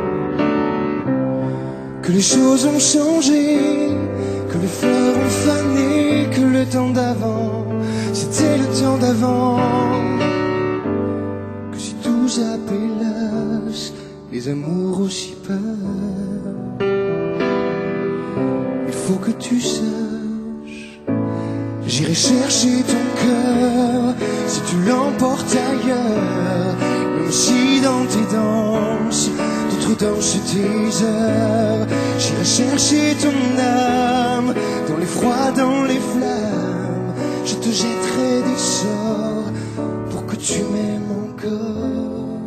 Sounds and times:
Music: 0.0s - 42.4s.

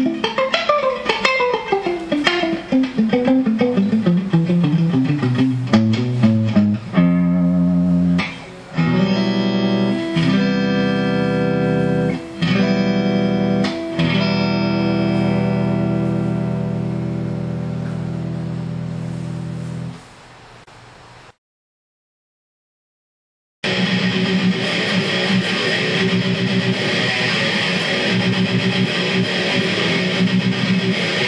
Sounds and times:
Strum: 0.0s - 19.9s
Acoustic guitar: 0.0s - 20.0s.

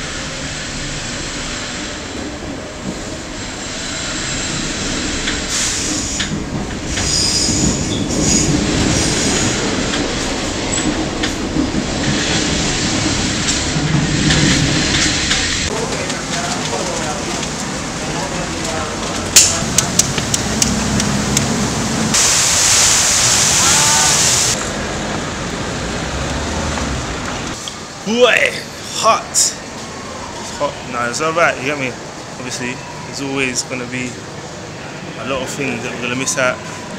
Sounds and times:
Train: 0.0s - 28.0s, 28.6s - 36.9s
Railroad car, train wagon: 0.0s - 36.9s.

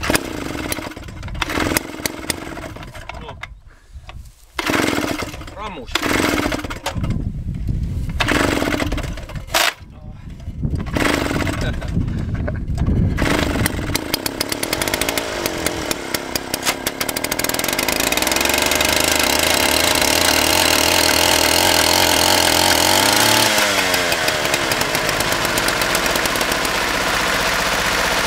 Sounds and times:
Chainsaw: 0.0s - 3.1s, 4.6s - 7.1s, 8.2s - 9.8s, 10.8s - 12.0s, 13.1s - 28.2s.

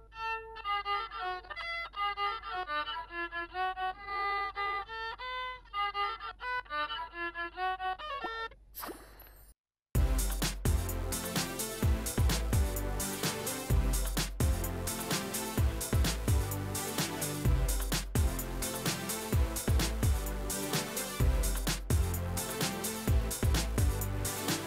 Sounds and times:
Violin, fiddle: 0.0s - 8.6s.

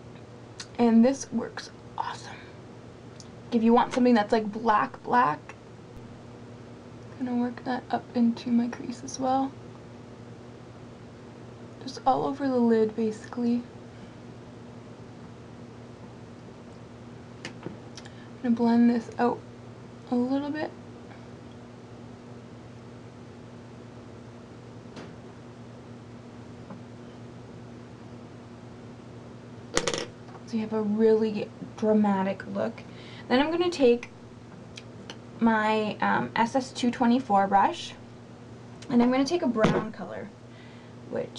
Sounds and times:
Inside, small room: 0.0s - 41.3s
Speech: 0.6s - 2.5s, 3.5s - 5.5s, 7.2s - 9.6s, 11.8s - 13.7s, 18.4s - 19.4s, 20.1s - 20.8s, 30.5s - 34.1s, 35.4s - 38.0s, 38.8s - 40.3s, 41.1s - 41.3s.

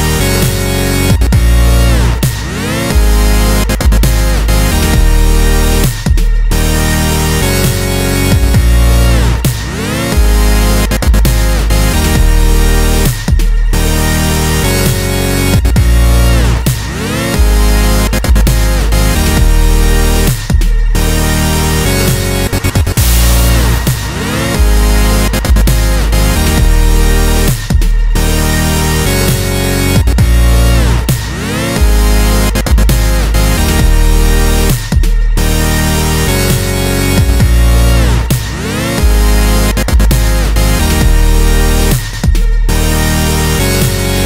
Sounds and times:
Dubstep: 0.0s - 44.2s.

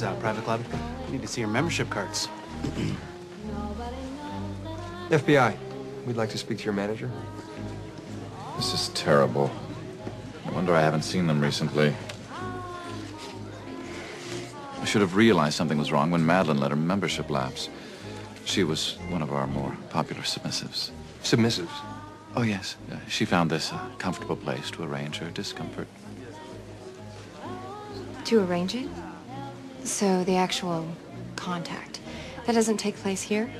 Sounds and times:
Music: 0.0s - 33.6s
Speech: 14.8s - 17.7s, 22.4s - 25.9s.

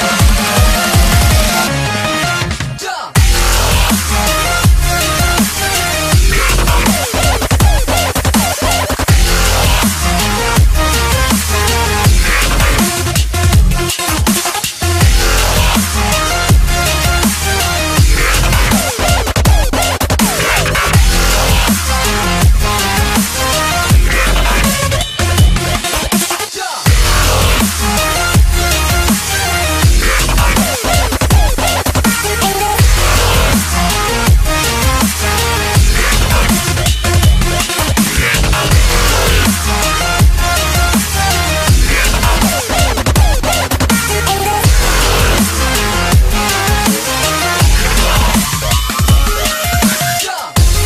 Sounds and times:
Dubstep: 0.0s - 50.8s.

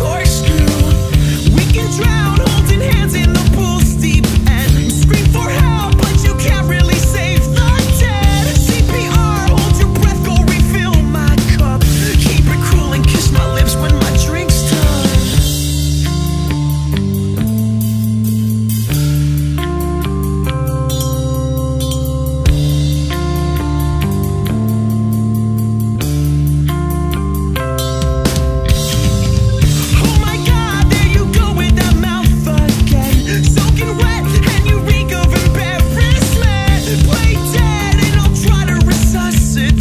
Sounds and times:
Music: 0.0s - 39.8s.

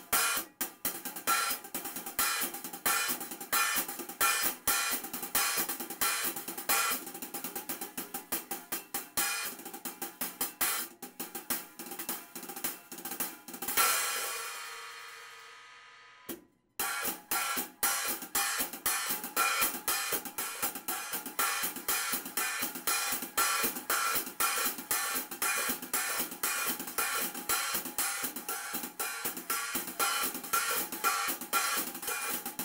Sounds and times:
Hi-hat: 0.0s - 15.5s, 16.8s - 32.6s.

